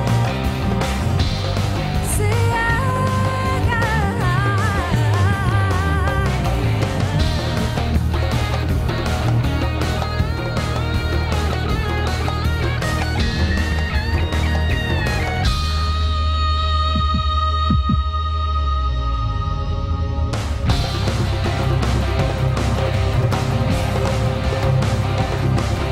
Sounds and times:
Music: 0.0 - 25.9.

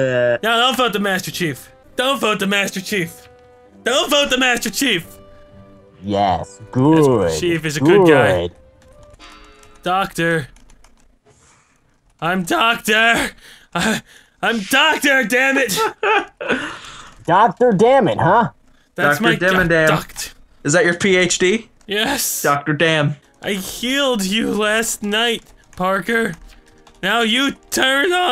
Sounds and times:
Speech: 0.0 - 3.2, 3.9 - 5.1, 6.0 - 8.5, 12.2 - 15.8, 17.3 - 26.4, 27.0 - 28.3
Music: 0.3 - 10.2, 23.2 - 28.3
Computer keyboard: 8.4 - 11.1, 23.3 - 28.3.

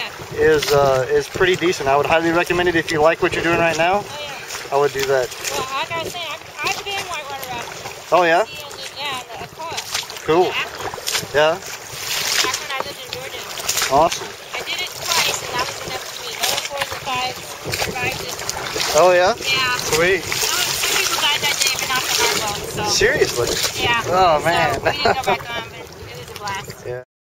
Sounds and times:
Rowboat, canoe, kayak: 0.0 - 27.0.

